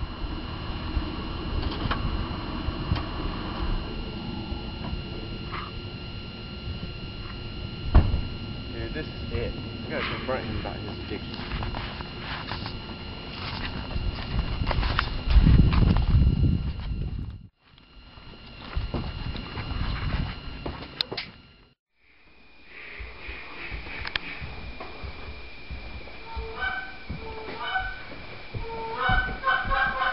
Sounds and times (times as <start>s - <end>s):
Speech: 8.7s - 11.4s.